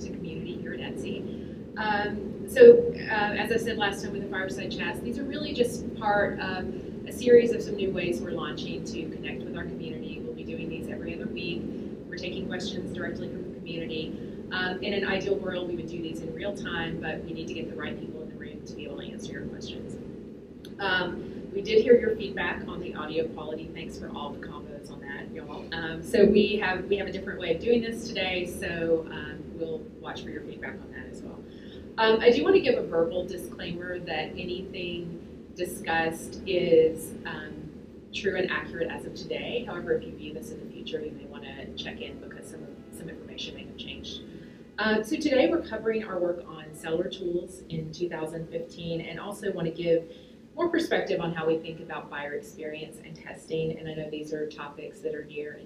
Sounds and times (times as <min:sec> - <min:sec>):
Speech: 0:00.0 - 0:19.9, 0:20.7 - 0:31.4, 0:32.0 - 0:44.2, 0:44.8 - 0:55.6.